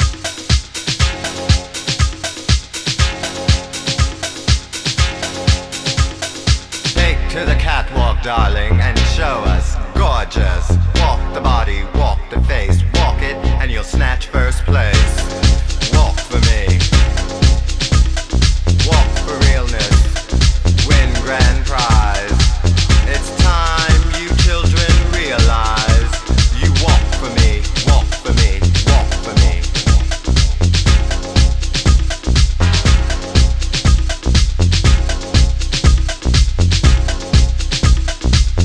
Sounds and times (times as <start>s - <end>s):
Music: 0.0s - 38.6s
Speech: 7.0s - 15.2s, 18.8s - 20.2s, 23.1s - 29.8s.